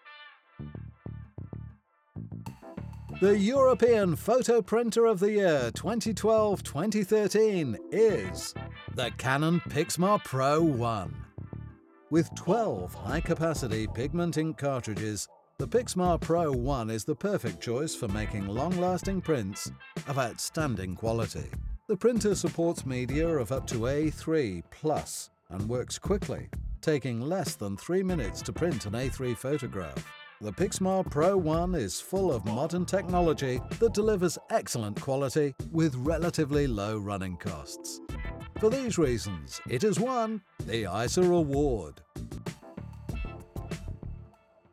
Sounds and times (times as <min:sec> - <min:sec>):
Music: 0:00.0 - 0:44.7
Speech: 0:03.2 - 0:11.2, 0:12.1 - 0:38.0, 0:38.6 - 0:42.0.